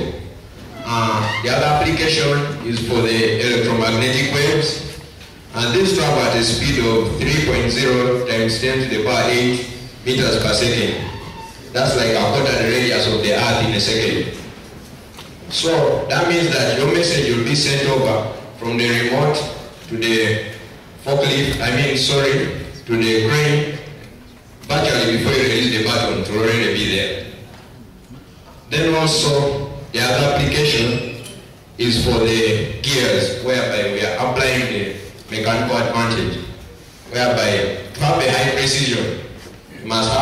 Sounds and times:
Male speech, man speaking: 0.0s - 0.2s, 0.8s - 14.4s, 15.5s - 24.0s, 24.6s - 27.4s, 28.7s - 31.2s, 31.8s - 40.2s.

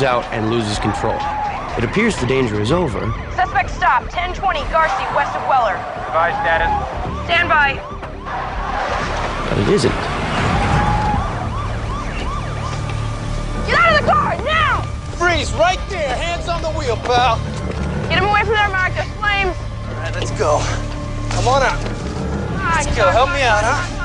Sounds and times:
Police car (siren): 0.4s - 14.9s.

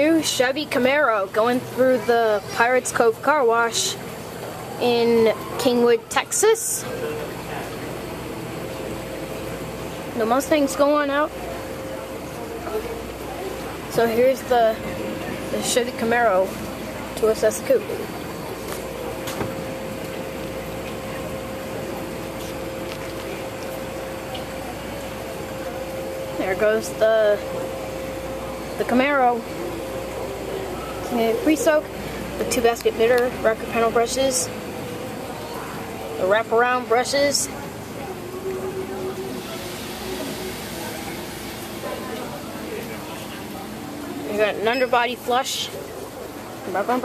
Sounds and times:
Speech: 0.0s - 4.0s, 4.8s - 7.8s, 10.1s - 18.1s, 26.4s - 27.5s, 28.8s - 29.5s, 30.9s - 34.6s, 35.4s - 41.2s, 41.8s - 47.0s.

